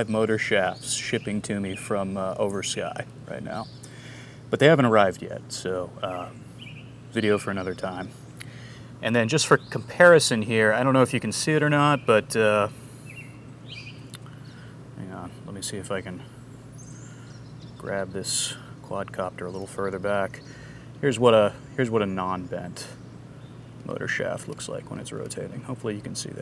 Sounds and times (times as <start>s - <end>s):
Speech: 0.0s - 3.7s, 4.5s - 6.4s, 7.1s - 8.2s, 9.0s - 12.8s, 15.0s - 16.3s, 17.8s - 20.4s, 21.0s - 23.0s, 23.8s - 26.4s
Outside, rural or natural: 0.0s - 26.4s.